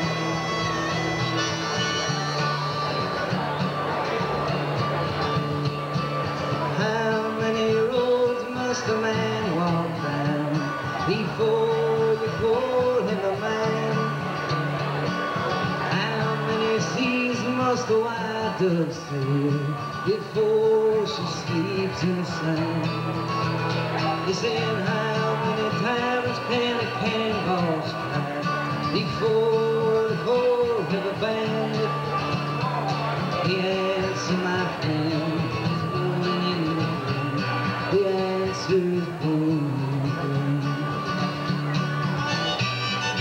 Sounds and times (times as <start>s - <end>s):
Music: 0.0s - 43.2s.